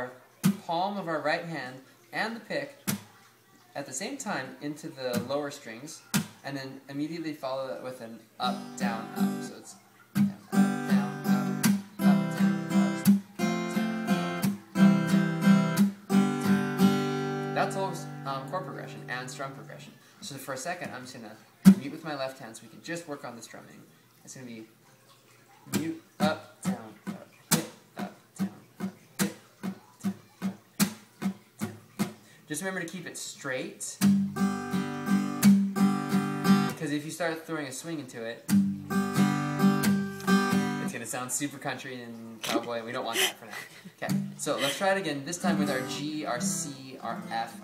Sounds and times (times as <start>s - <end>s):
Speech: 0.0s - 12.4s, 17.6s - 24.7s, 25.6s - 28.6s, 32.5s - 34.0s, 36.7s - 38.5s, 40.8s - 47.6s
Acoustic guitar: 0.0s - 47.6s.